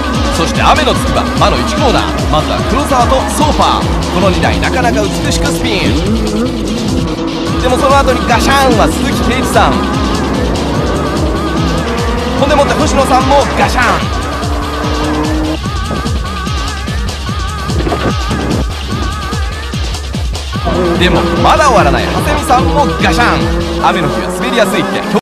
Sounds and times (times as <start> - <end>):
Music: 0.0 - 25.2
Speech: 0.3 - 6.0, 7.6 - 9.8, 12.4 - 14.1, 20.7 - 25.2.